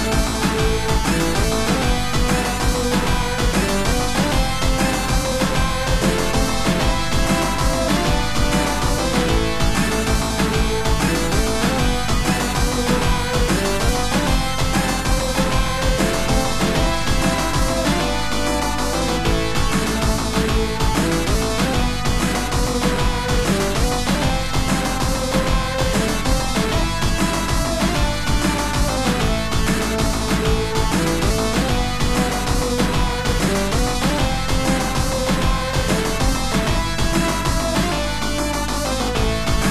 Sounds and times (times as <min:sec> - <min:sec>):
Theme music: 0:00.0 - 0:39.7.